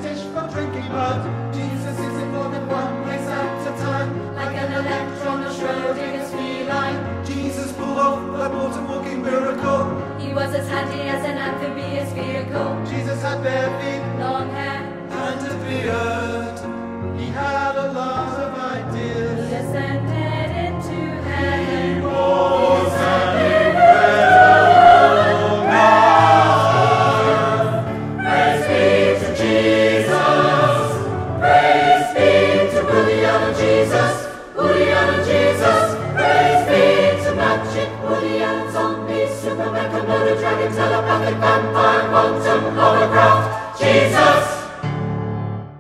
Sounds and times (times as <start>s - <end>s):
Choir: 0.0s - 45.0s.